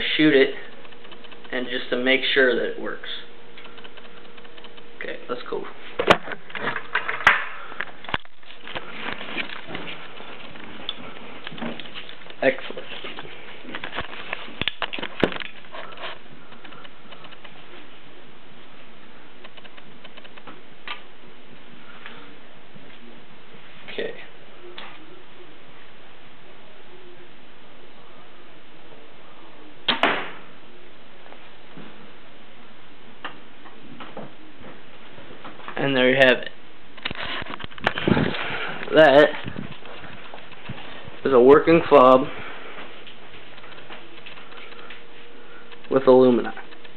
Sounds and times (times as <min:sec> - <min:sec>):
Speech: 0:01.5 - 0:03.3, 0:05.0 - 0:05.8, 0:12.4 - 0:12.9, 0:23.9 - 0:24.3, 0:35.8 - 0:36.6, 0:38.9 - 0:39.4, 0:41.2 - 0:42.3, 0:45.9 - 0:46.6.